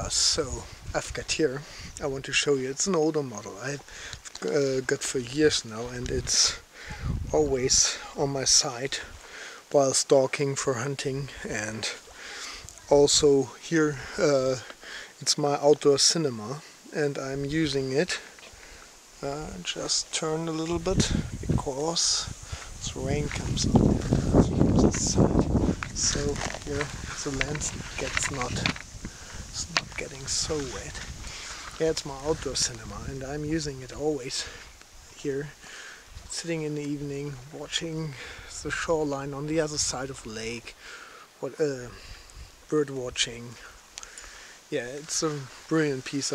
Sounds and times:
Speech: 0.0s - 6.6s, 7.2s - 9.1s, 9.7s - 12.0s, 12.8s - 18.3s, 19.2s - 28.8s, 29.6s - 31.0s, 31.8s - 34.6s, 35.2s - 35.6s, 36.3s - 40.7s, 41.4s - 42.0s, 42.7s - 43.7s, 44.7s - 46.3s.

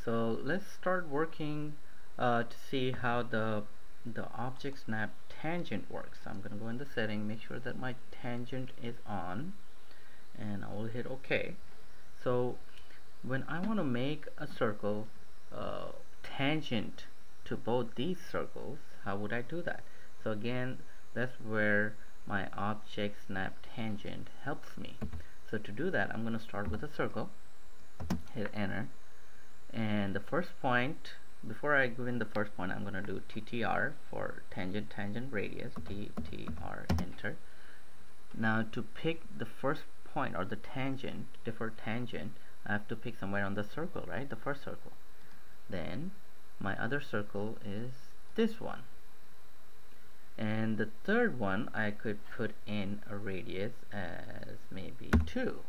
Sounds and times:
Speech: 0.0s - 9.6s, 10.4s - 11.6s, 12.2s - 27.3s, 28.3s - 28.9s, 29.7s - 37.4s, 38.3s - 45.0s, 45.7s - 48.9s, 50.4s - 55.6s.

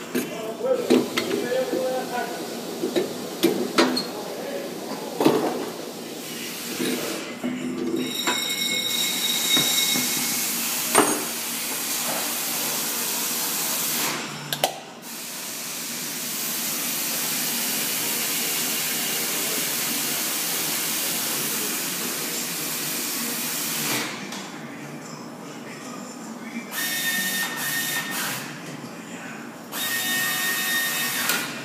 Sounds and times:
Speech: 0.2s - 2.5s, 4.0s - 5.3s.

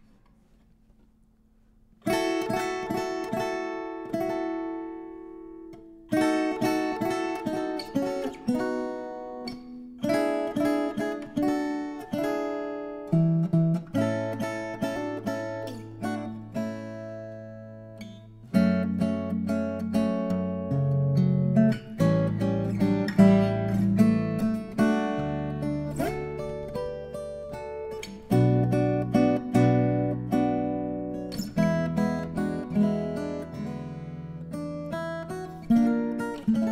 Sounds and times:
Acoustic guitar: 0.0s - 36.7s.

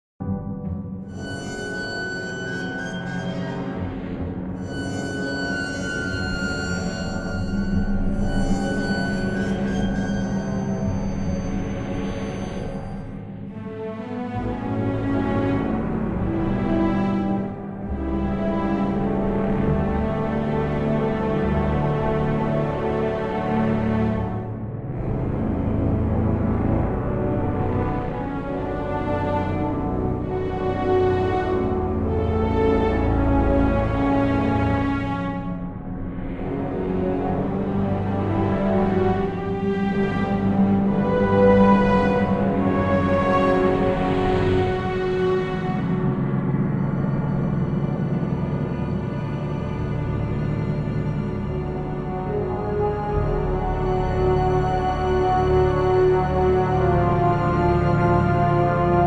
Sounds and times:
Soundtrack music: 0.2s - 59.0s.

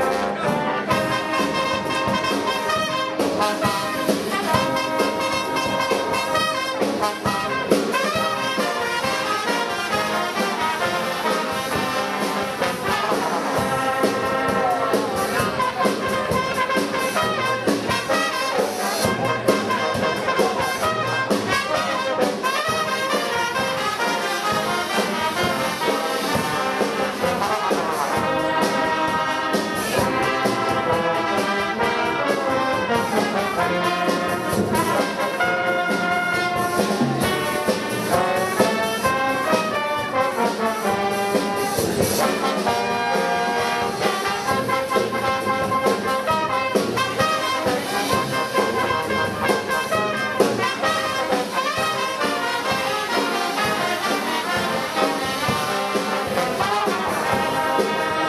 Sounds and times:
Speech: 0.0s - 28.6s, 47.2s - 55.0s
Brass instrument: 0.0s - 58.2s
Orchestra: 0.0s - 58.2s.

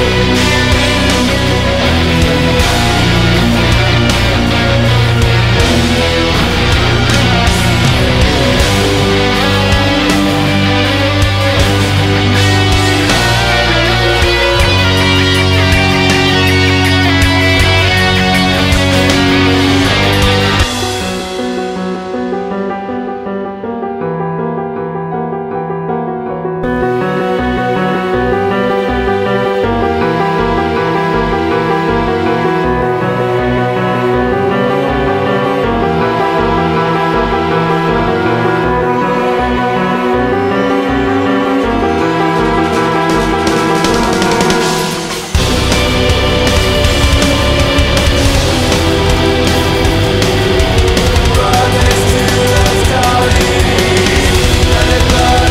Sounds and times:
Theme music: 0.0s - 55.5s.

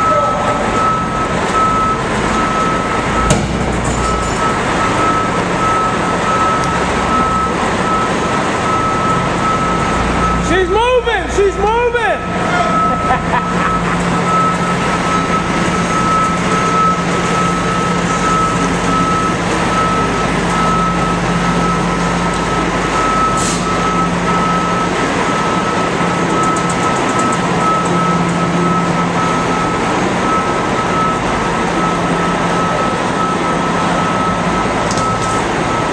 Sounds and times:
Reversing beeps: 0.0s - 11.1s, 12.2s - 35.9s.

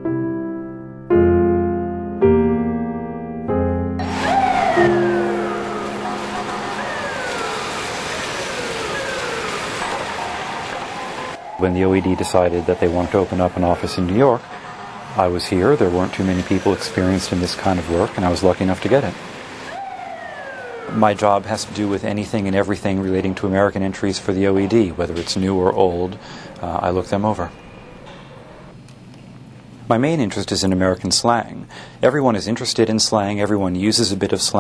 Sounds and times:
Speech: 11.6s - 14.4s, 15.2s - 19.2s, 20.9s - 27.6s, 29.9s - 34.6s.

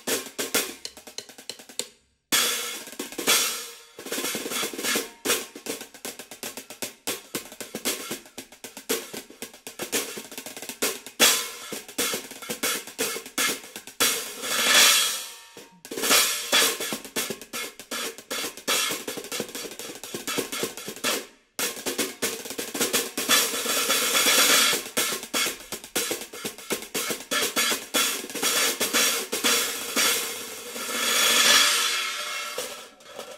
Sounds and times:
Music: 0.0s - 33.3s.

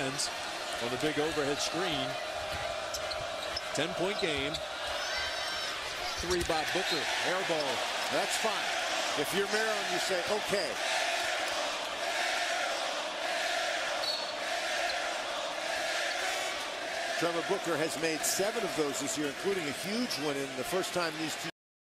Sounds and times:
Speech: 0.0s - 2.2s, 3.8s - 4.6s, 6.0s - 8.6s, 9.2s - 10.8s, 17.2s - 21.6s.

